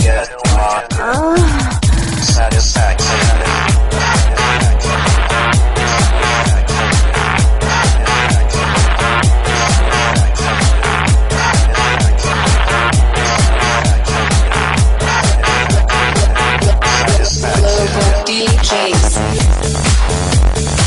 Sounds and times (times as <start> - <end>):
Music: 0.0 - 20.8.